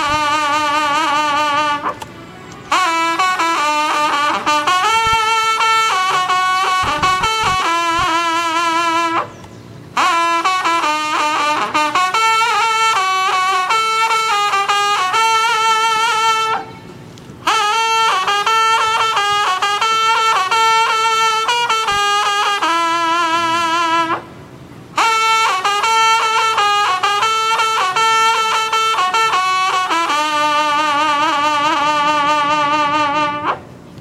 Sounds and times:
Music: 0:00.0 - 0:09.3, 0:10.0 - 0:16.9, 0:17.5 - 0:24.2, 0:25.0 - 0:33.6
Outside, rural or natural: 0:00.0 - 0:34.0.

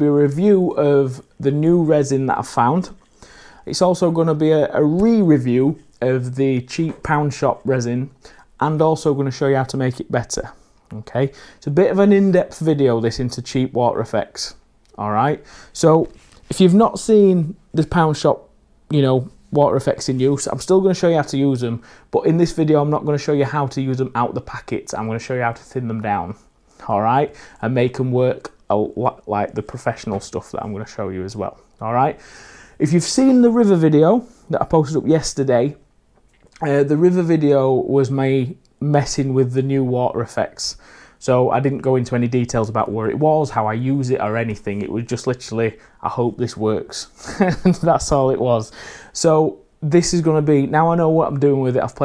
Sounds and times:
Speech: 0:00.0 - 0:03.0, 0:03.6 - 0:32.2, 0:32.8 - 0:35.8, 0:36.5 - 0:52.0.

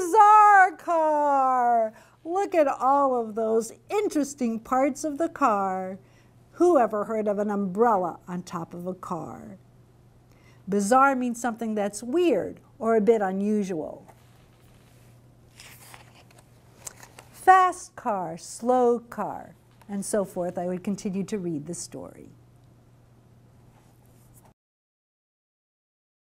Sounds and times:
Speech: 0:00.0 - 0:06.0, 0:06.6 - 0:09.6, 0:10.7 - 0:14.1, 0:17.4 - 0:22.4.

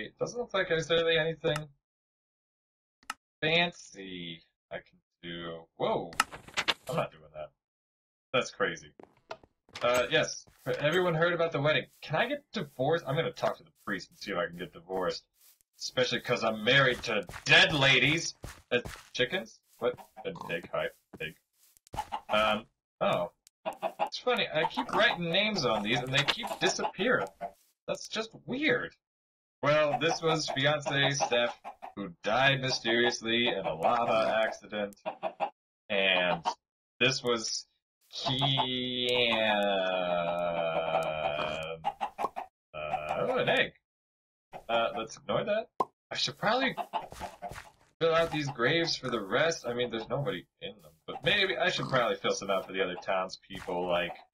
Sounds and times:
Speech: 0:00.0 - 0:01.7, 0:03.4 - 0:06.2, 0:06.9 - 0:07.5, 0:08.4 - 0:08.9, 0:09.8 - 0:21.3, 0:22.3 - 0:23.3, 0:24.1 - 0:27.3, 0:27.9 - 0:29.0, 0:29.6 - 0:35.0, 0:35.9 - 0:41.8, 0:42.8 - 0:43.7, 0:44.6 - 0:46.8, 0:48.0 - 0:54.3.

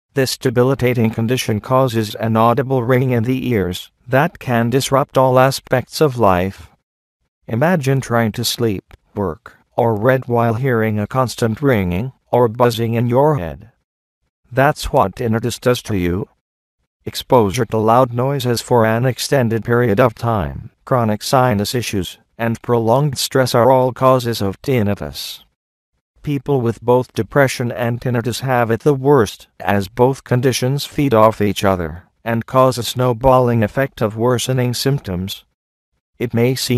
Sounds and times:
Speech: 0:00.2 - 0:06.7, 0:07.5 - 0:13.8, 0:14.5 - 0:16.4, 0:17.1 - 0:25.5, 0:26.2 - 0:35.5, 0:36.2 - 0:36.7.

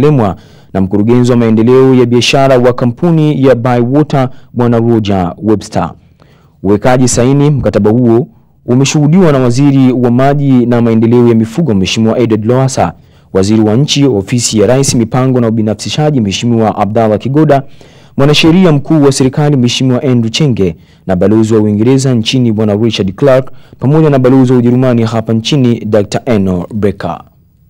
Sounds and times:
Speech: 0:00.0 - 0:06.0, 0:06.6 - 0:27.4.

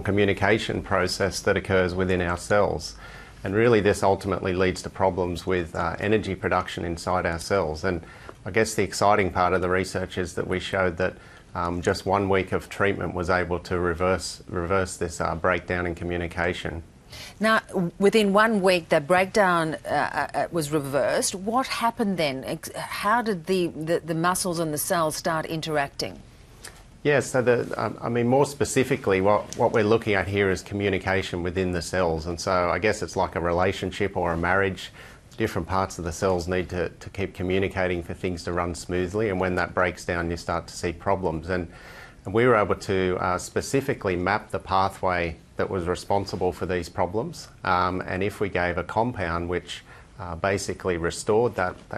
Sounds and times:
Speech: 0:27.1 - 0:41.7.

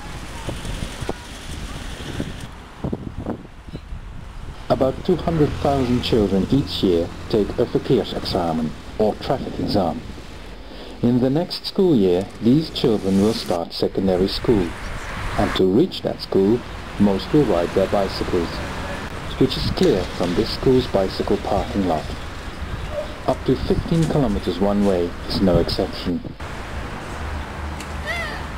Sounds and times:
Speech: 0:04.7 - 0:10.0, 0:11.0 - 0:14.8, 0:15.4 - 0:22.2, 0:23.2 - 0:26.4.

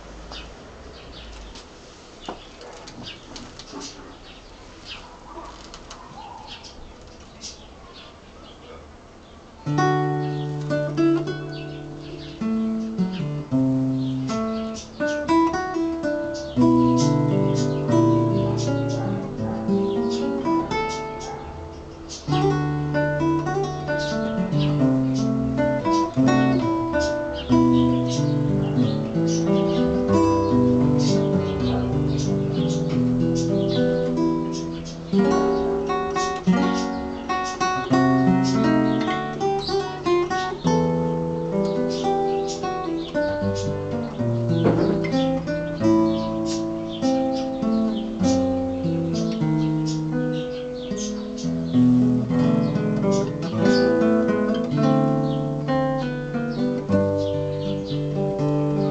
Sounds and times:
Acoustic guitar: 0:08.8 - 0:58.9.

